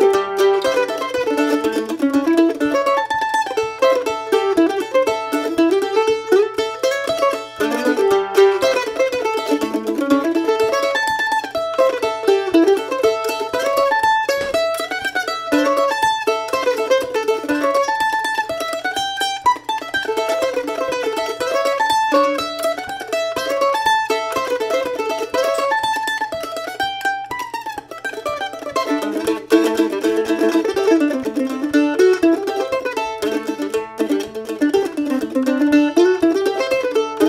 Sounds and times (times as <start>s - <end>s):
Banjo: 0.0s - 37.2s
Mandolin: 0.0s - 37.2s.